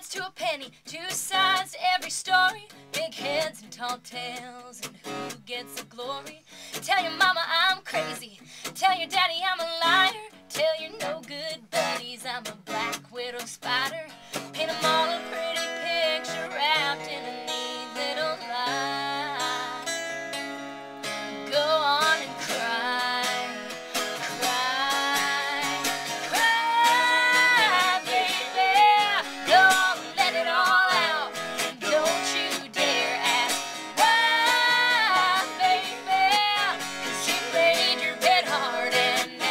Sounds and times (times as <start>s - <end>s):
Music: 0.0s - 39.5s.